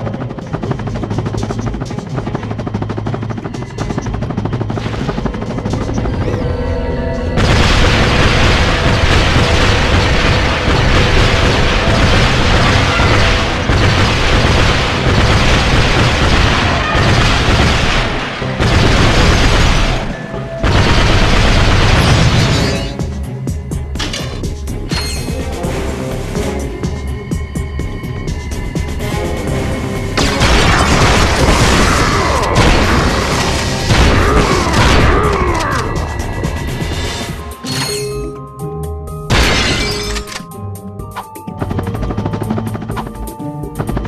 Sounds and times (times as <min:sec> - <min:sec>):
Music: 0:00.0 - 0:44.0.